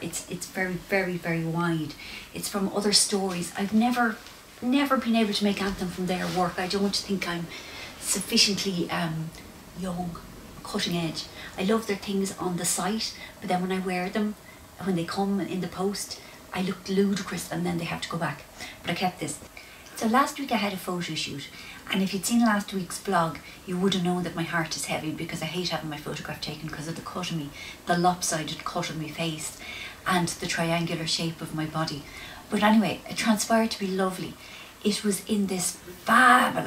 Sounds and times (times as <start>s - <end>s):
Speech: 0.0s - 36.6s.